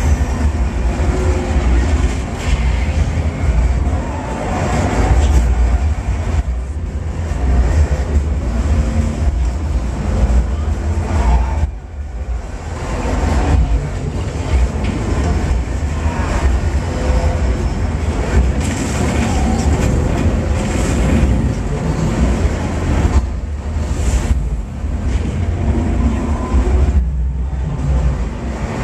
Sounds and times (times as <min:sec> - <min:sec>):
Race car, auto racing: 0:00.0 - 0:28.8
Traffic noise, roadway noise: 0:00.0 - 0:28.8.